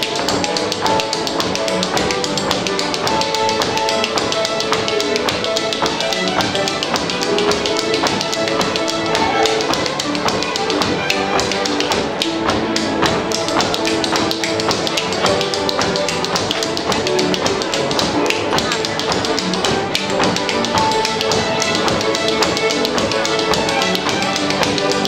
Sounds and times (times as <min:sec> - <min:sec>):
Orchestra: 0:00.0 - 0:25.0
Tap: 0:00.0 - 0:25.0.